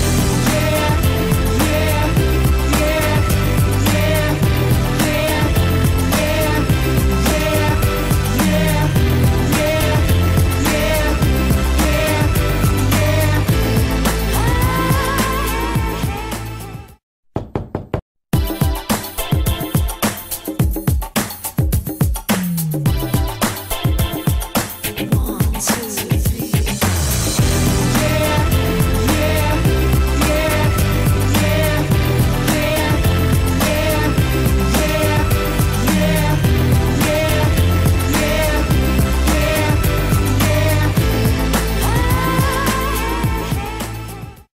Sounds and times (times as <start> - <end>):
Music: 0.0 - 17.0, 18.3 - 44.5.